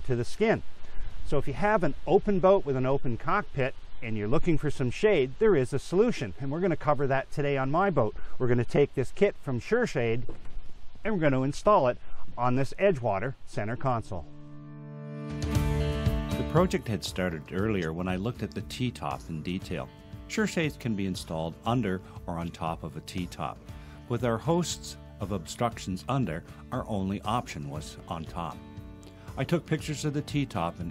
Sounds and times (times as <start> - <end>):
Speech: 0.0 - 0.6, 1.3 - 10.3, 11.1 - 14.3, 16.4 - 28.6, 29.4 - 30.9
Music: 14.2 - 30.9.